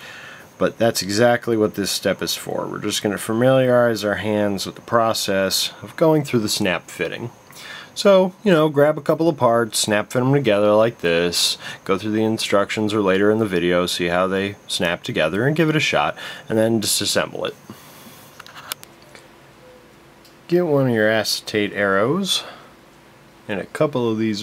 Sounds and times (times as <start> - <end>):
Speech: 0.6 - 17.7, 20.5 - 22.7, 23.5 - 24.4.